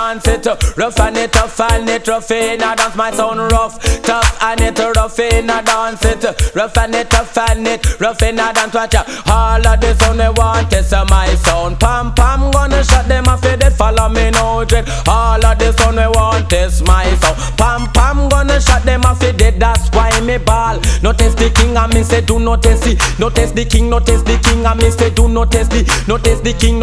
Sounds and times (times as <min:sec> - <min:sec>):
Music: 0:00.0 - 0:26.8.